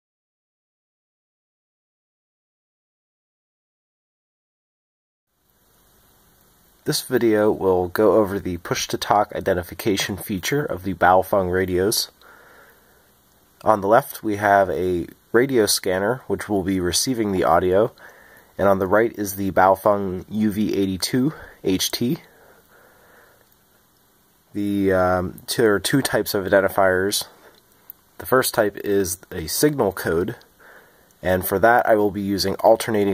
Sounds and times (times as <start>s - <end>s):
Speech: 6.8s - 12.3s, 13.6s - 22.4s, 24.5s - 27.5s, 28.2s - 30.5s, 31.2s - 33.1s.